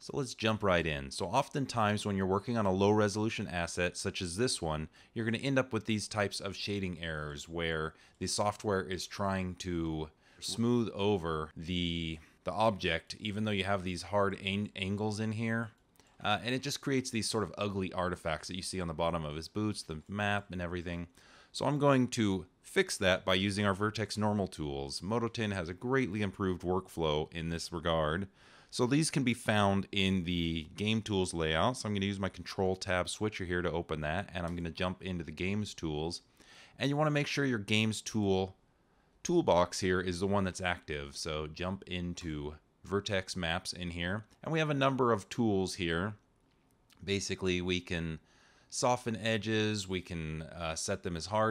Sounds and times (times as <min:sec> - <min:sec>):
Speech: 0:00.0 - 0:38.6, 0:39.2 - 0:46.2, 0:46.9 - 0:51.5.